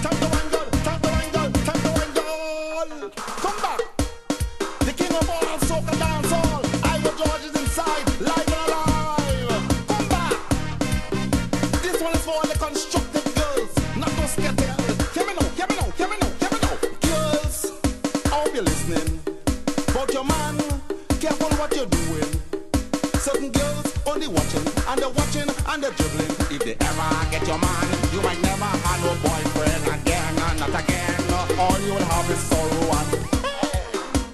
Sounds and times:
Music: 0:00.0 - 0:34.3.

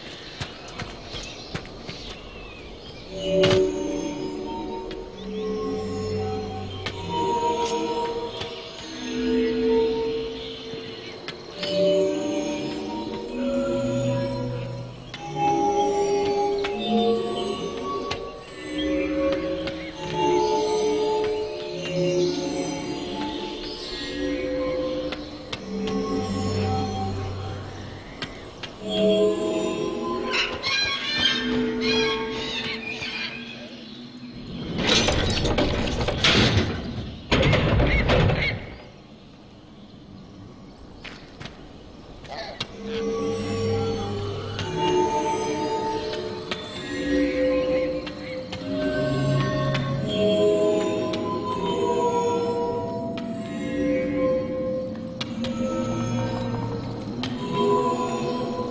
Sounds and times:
Music: 0:00.0 - 0:58.7.

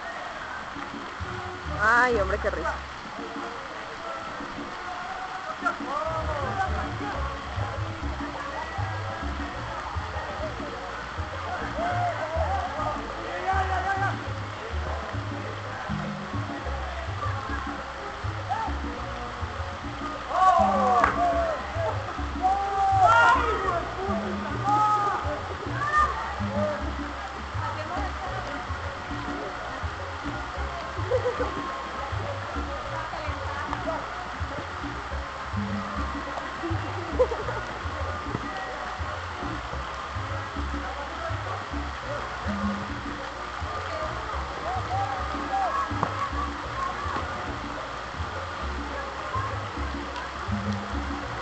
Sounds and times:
Rain on surface: 0:00.0 - 0:51.4
Raindrop: 0:00.0 - 0:51.4.

